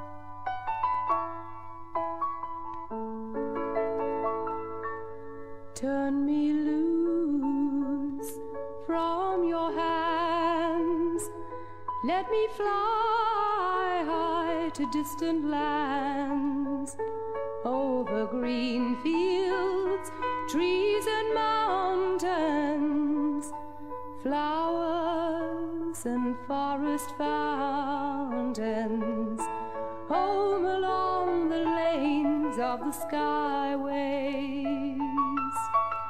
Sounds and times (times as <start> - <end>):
Music: 0.0 - 36.0.